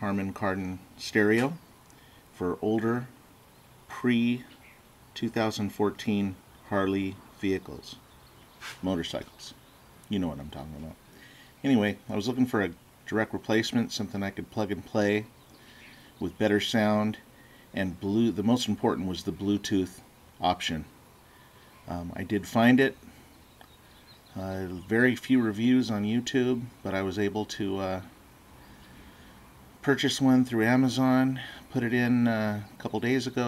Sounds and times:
Speech: 0.0 - 1.6, 2.4 - 3.1, 3.9 - 4.5, 5.2 - 8.0, 8.8 - 11.0, 11.6 - 15.3, 16.2 - 17.2, 17.8 - 20.9, 21.9 - 23.0, 24.3 - 28.1, 29.8 - 33.4.

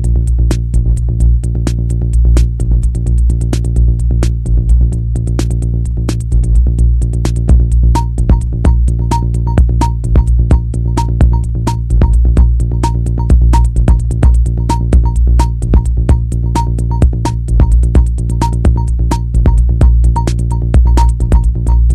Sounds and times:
Music: 0.0 - 21.9.

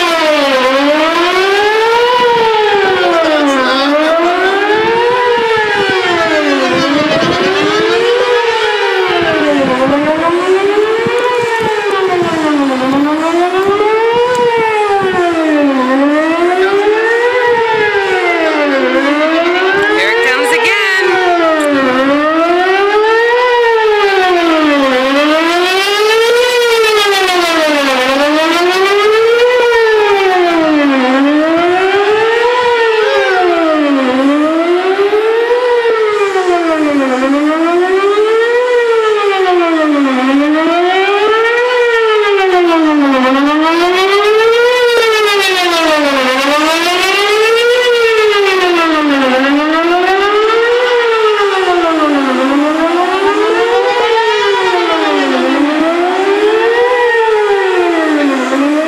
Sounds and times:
Civil defense siren: 0.0 - 58.8.

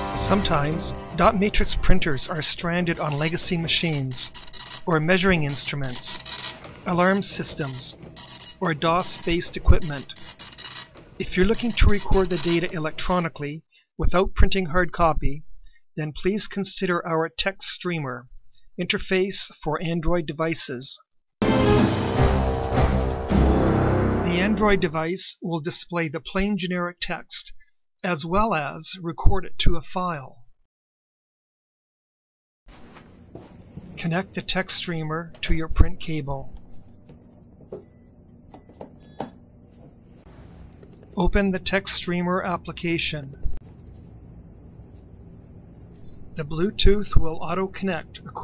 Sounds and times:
Music: 0.0 - 2.5, 21.4 - 24.9
Speech: 0.2 - 6.2, 6.9 - 8.0, 8.6 - 10.1, 11.2 - 15.4, 16.0 - 21.0, 24.3 - 30.4, 34.0 - 36.5, 41.2 - 43.4, 46.1 - 48.4.

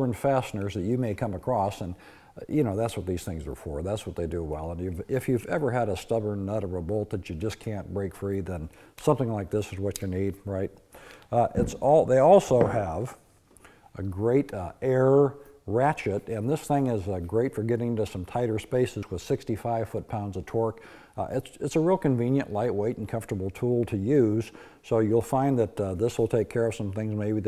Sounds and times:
Speech: 0.0 - 13.2, 13.9 - 27.4.

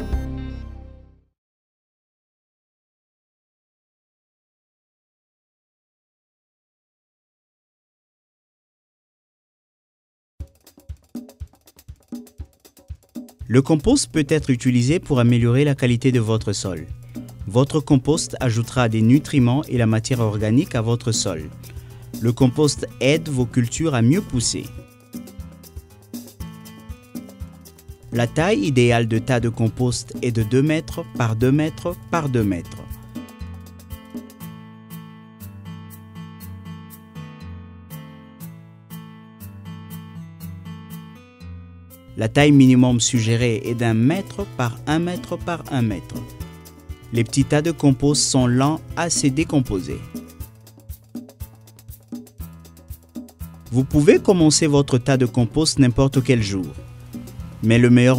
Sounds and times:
Music: 0.0 - 1.4, 10.4 - 58.1
Speech: 13.5 - 21.6, 22.2 - 24.8, 28.2 - 32.9, 42.2 - 46.3, 47.1 - 50.2, 53.7 - 56.8, 57.6 - 58.1.

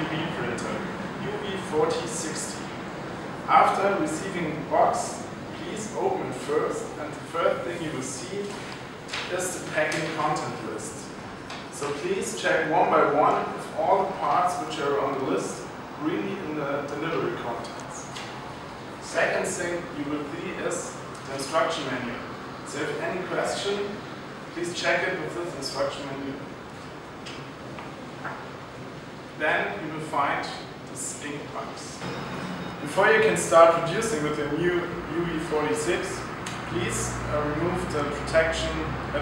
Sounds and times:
Speech: 0.0 - 18.2, 19.0 - 26.5, 29.4 - 32.0, 32.8 - 39.2.

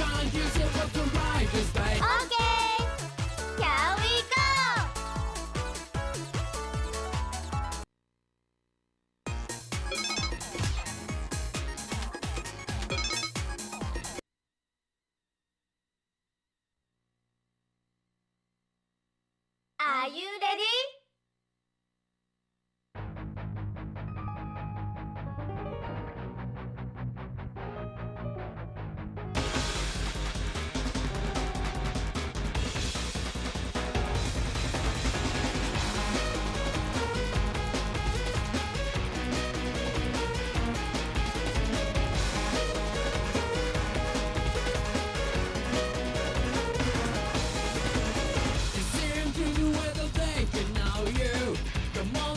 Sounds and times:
Music: 0.0 - 7.9, 9.3 - 14.2, 23.0 - 52.3.

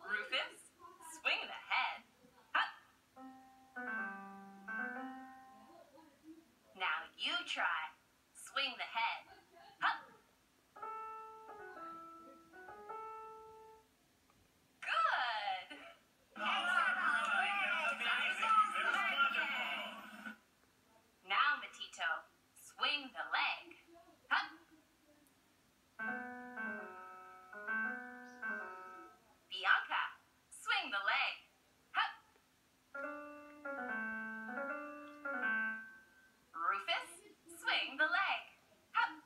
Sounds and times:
Speech: 0.0 - 2.8, 5.6 - 10.2, 14.8 - 25.3, 29.4 - 32.1, 36.6 - 39.2
Music: 3.2 - 6.0, 10.8 - 13.9, 16.4 - 20.4, 26.0 - 29.4, 33.0 - 36.4.

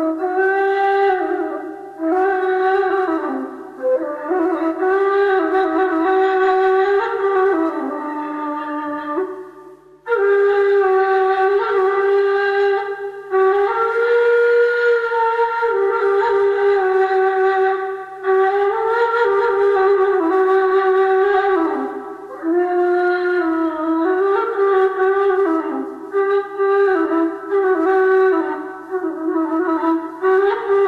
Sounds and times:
Music: 0.0 - 30.8.

